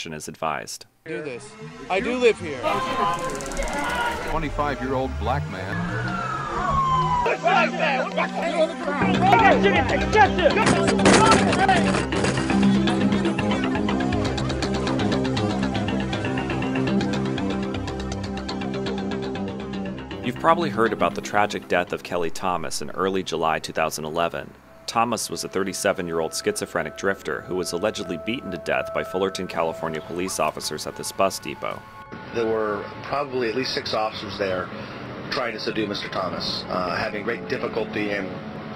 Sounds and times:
Music: 1.0s - 38.7s.

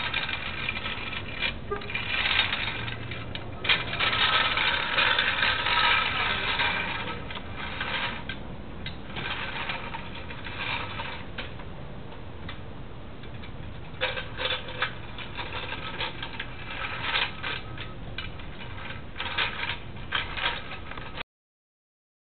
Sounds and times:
Vehicle: 0.0s - 21.2s.

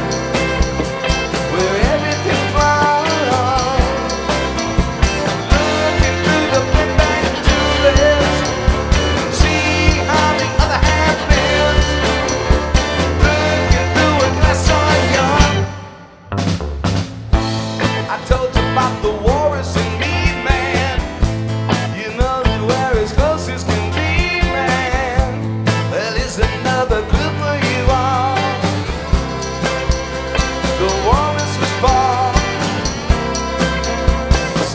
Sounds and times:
Music: 0.0s - 34.7s.

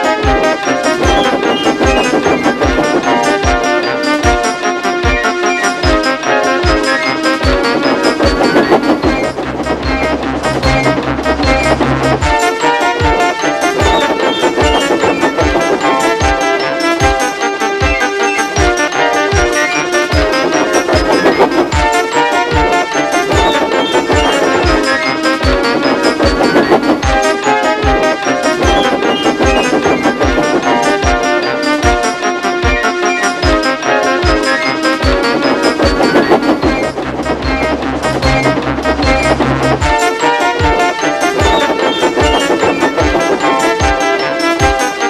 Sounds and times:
Music: 0.0s - 45.1s.

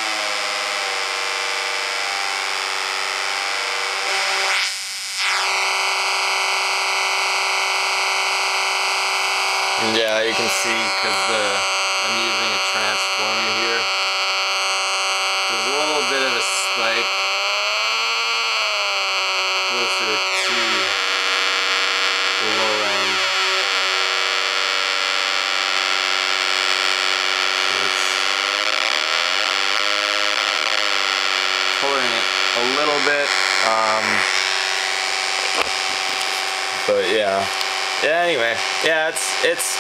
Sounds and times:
Speech: 9.8s - 13.9s, 15.5s - 17.1s, 19.7s - 21.0s, 22.4s - 23.2s, 27.7s - 28.2s, 31.8s - 34.3s, 36.9s - 39.8s.

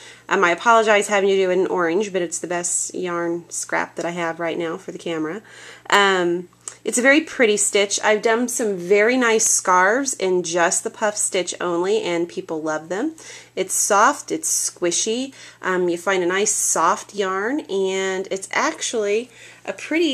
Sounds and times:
Speech: 0.3s - 20.1s.

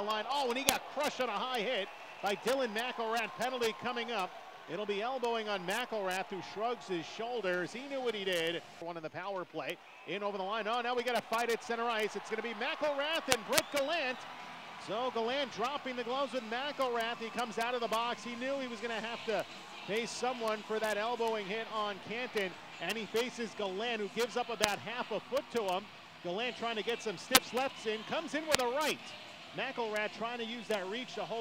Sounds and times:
Speech: 0.0s - 14.2s, 14.8s - 31.4s.

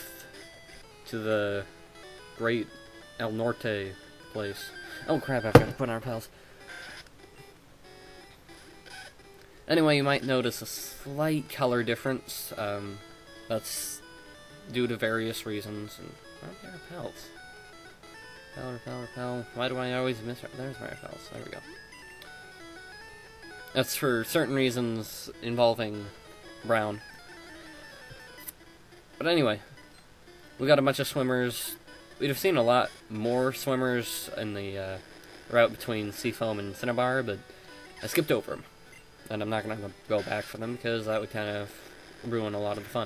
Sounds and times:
Music: 0.0s - 43.0s
Speech: 1.1s - 1.7s, 2.4s - 6.3s, 9.7s - 14.0s, 14.7s - 17.3s, 18.6s - 21.8s, 23.8s - 27.0s, 29.2s - 29.7s, 30.6s - 37.4s, 38.0s - 38.7s, 39.3s - 43.0s.

